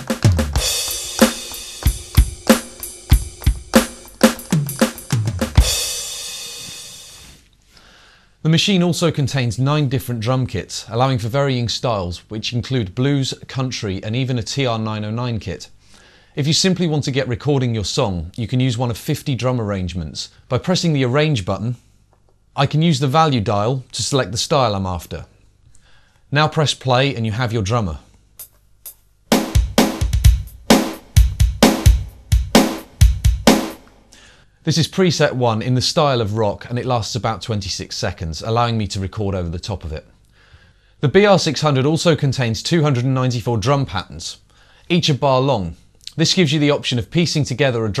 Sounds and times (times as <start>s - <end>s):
Drum machine: 0.0s - 7.2s, 28.4s - 34.1s
Speech: 8.4s - 15.7s, 16.4s - 21.8s, 22.6s - 25.4s, 26.3s - 28.1s, 34.6s - 40.1s, 41.0s - 48.0s.